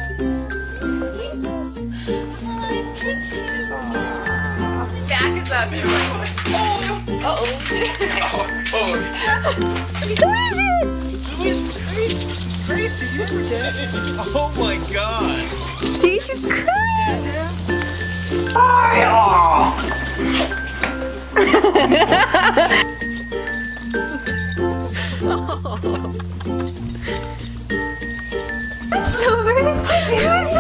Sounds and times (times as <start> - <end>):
Music: 0.0 - 30.6.